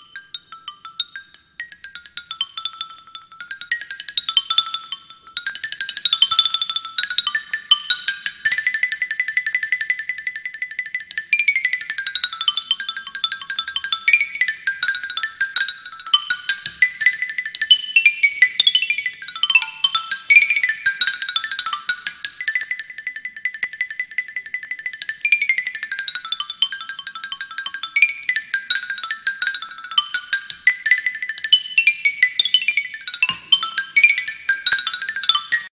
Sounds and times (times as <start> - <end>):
Marimba, xylophone: 0.0 - 35.7.